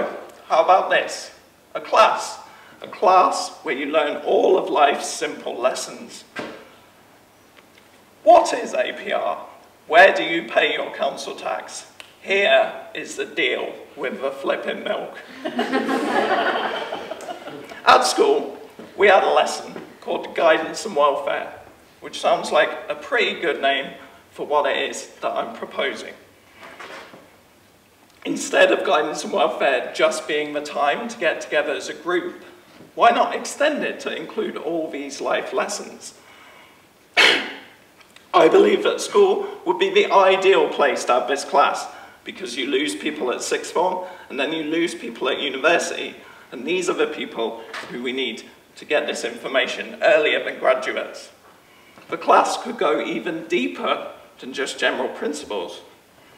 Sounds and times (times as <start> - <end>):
Speech: 0.0 - 6.4, 8.2 - 15.3, 17.8 - 26.3, 28.2 - 36.2, 38.3 - 51.4, 52.1 - 55.9.